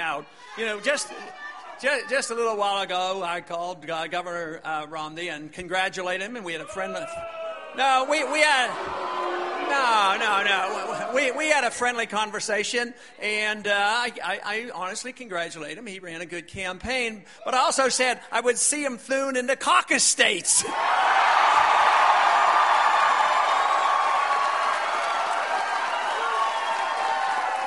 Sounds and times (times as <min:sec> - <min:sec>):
Male speech, man speaking: 0:00.0 - 0:07.2, 0:07.8 - 0:08.8, 0:09.7 - 0:20.7.